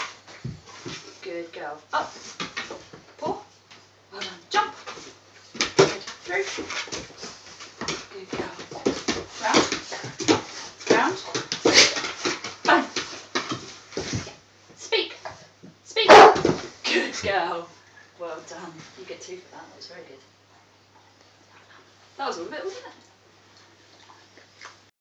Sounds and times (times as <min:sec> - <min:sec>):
Speech: 0:01.2 - 0:02.2, 0:03.2 - 0:03.5, 0:04.1 - 0:04.9, 0:05.8 - 0:06.7, 0:08.1 - 0:08.8, 0:09.4 - 0:10.2, 0:10.9 - 0:11.4, 0:12.7 - 0:12.9, 0:14.8 - 0:15.3, 0:16.9 - 0:20.3, 0:22.2 - 0:23.0
Yip: 0:16.1 - 0:16.4.